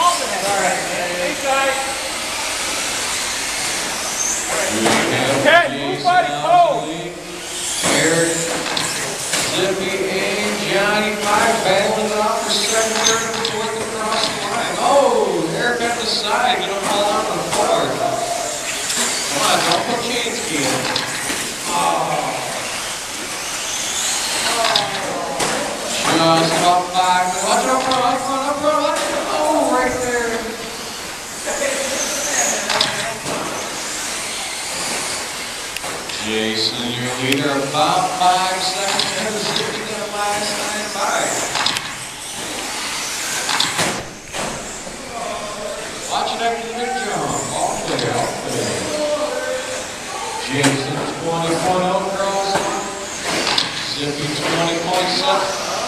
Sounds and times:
Inside, large room or hall: 0.0s - 55.8s
Speech: 4.5s - 7.2s, 7.8s - 8.6s, 9.4s - 18.6s, 19.3s - 21.0s, 21.6s - 22.8s, 24.5s - 30.7s, 36.1s - 41.6s, 45.0s - 53.1s, 53.9s - 55.8s.

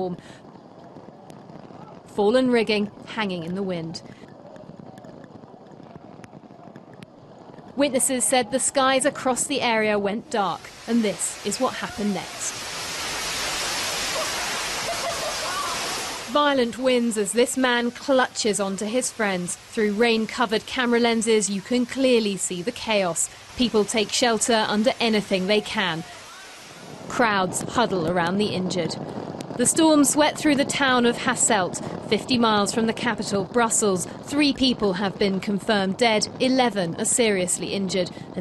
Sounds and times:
Speech: 7.8s - 12.5s, 16.3s - 26.1s, 27.1s - 29.0s, 29.6s - 38.4s.

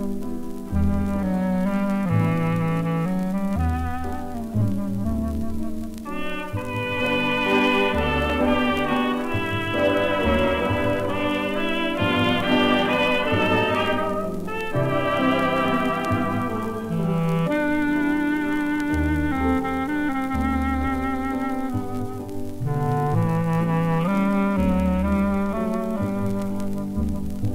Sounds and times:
Music: 0.0s - 27.5s.

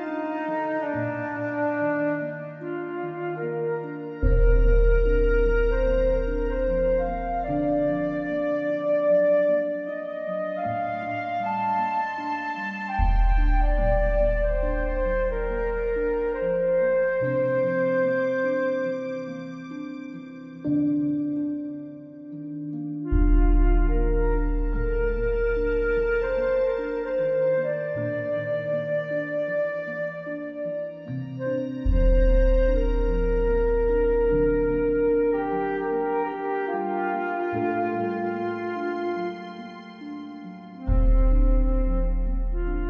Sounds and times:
Music: 0.0s - 42.8s.

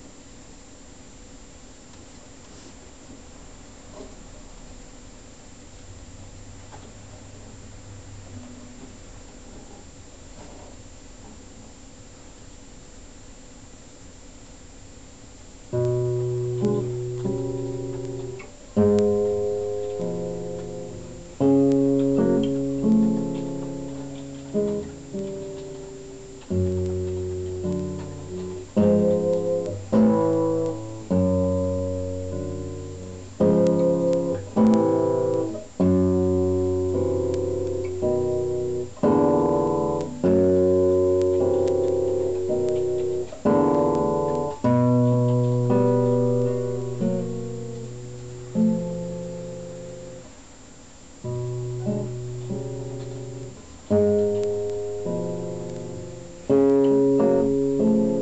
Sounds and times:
Guitar: 15.3s - 58.2s.

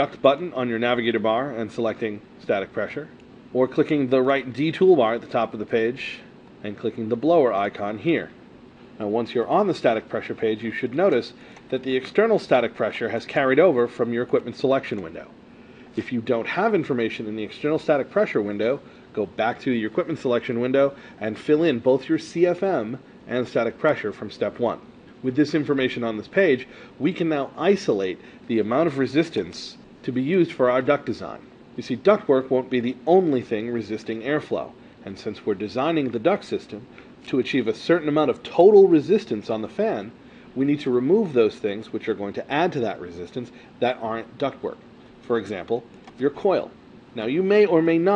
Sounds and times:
Speech: 0.0s - 8.4s, 9.0s - 48.1s.

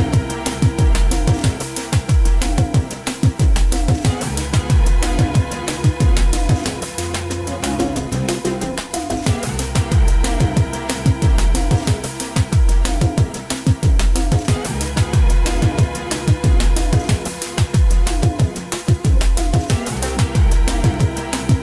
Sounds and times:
Music: 0.0s - 21.6s.

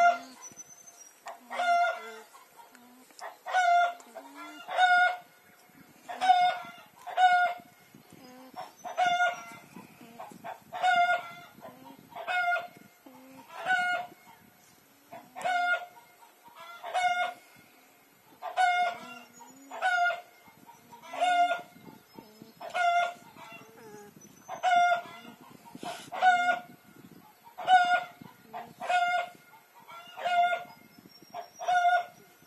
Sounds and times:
Livestock, farm animals, working animals: 0.0s - 32.4s.

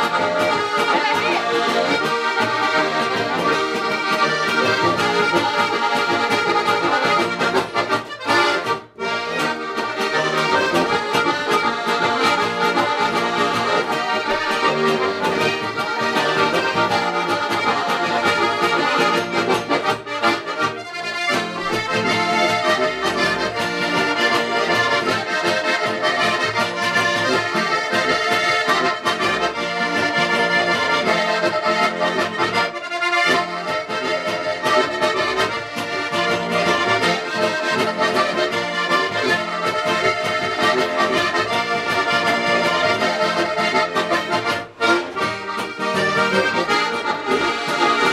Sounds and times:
Accordion: 0.0s - 48.1s
Traditional music: 0.0s - 48.1s.

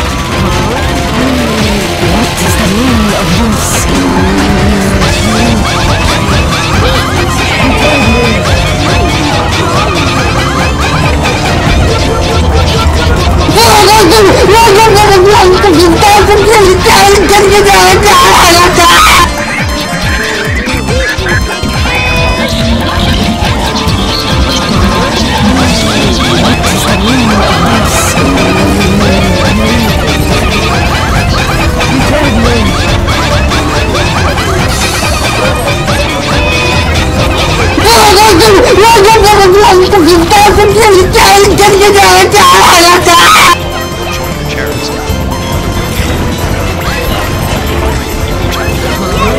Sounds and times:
Music: 0.0s - 49.3s
Speech: 1.2s - 5.6s, 13.5s - 19.3s, 24.8s - 30.2s, 31.9s - 32.8s, 37.8s - 43.6s.

